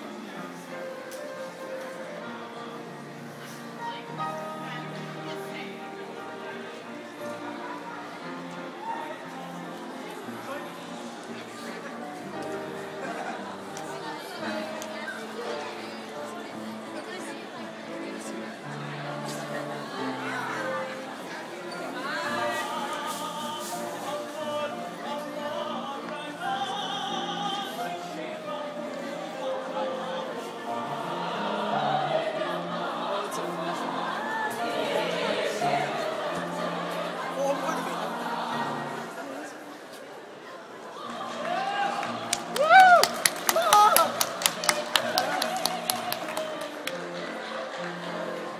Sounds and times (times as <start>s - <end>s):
Music: 0.0s - 40.1s, 40.7s - 48.5s
Crowd: 0.0s - 48.5s
Inside, public space: 0.0s - 48.5s.